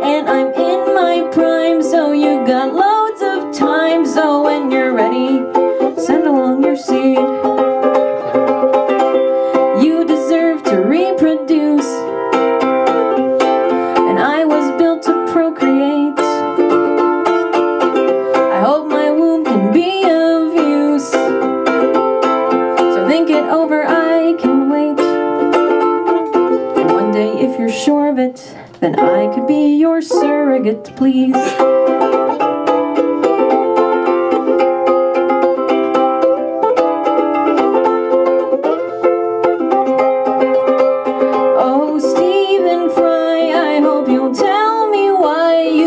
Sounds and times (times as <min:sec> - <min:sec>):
Ukulele: 0:00.0 - 0:45.8.